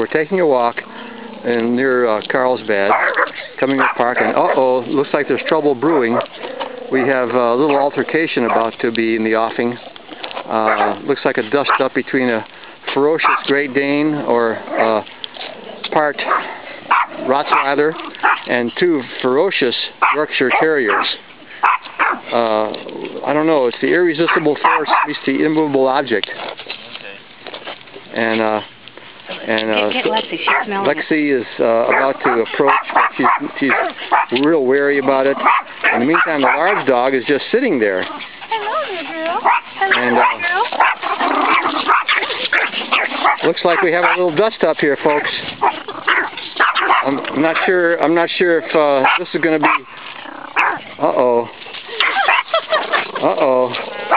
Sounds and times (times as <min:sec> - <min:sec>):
Speech: 0:01.5 - 0:06.2, 0:06.9 - 0:09.8, 0:10.5 - 0:15.0, 0:17.3 - 0:21.2, 0:22.3 - 0:26.4, 0:29.4 - 0:40.7, 0:43.4 - 0:45.5, 0:47.0 - 0:49.8
Bow-wow: 0:02.9 - 0:04.6, 0:08.4 - 0:08.8, 0:10.6 - 0:11.0, 0:13.2 - 0:13.6, 0:16.2 - 0:18.6, 0:20.0 - 0:22.2, 0:24.3 - 0:25.1, 0:31.9 - 0:34.4, 0:35.4 - 0:37.0, 0:39.3 - 0:44.3, 0:45.6 - 0:47.7, 0:49.0 - 0:49.9, 0:50.6 - 0:50.8, 0:52.0 - 0:53.0, 0:53.8 - 0:54.1.